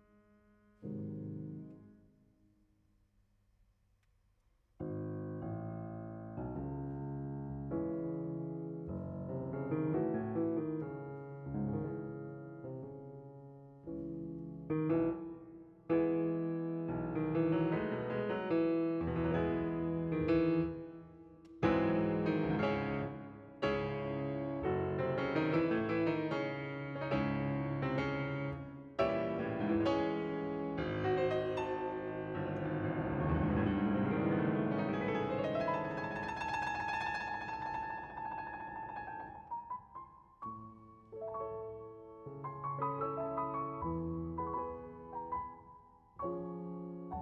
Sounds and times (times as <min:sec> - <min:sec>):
Piano: 0:00.0 - 0:02.8, 0:04.8 - 0:47.2.